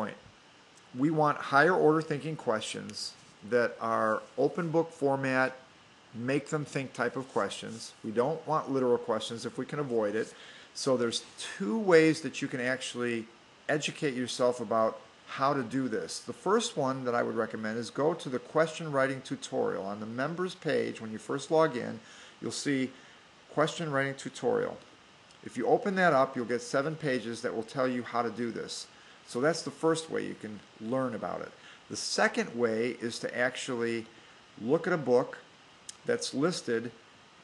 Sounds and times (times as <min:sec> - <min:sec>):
Speech: 0:00.0 - 0:00.3, 0:00.9 - 0:37.0.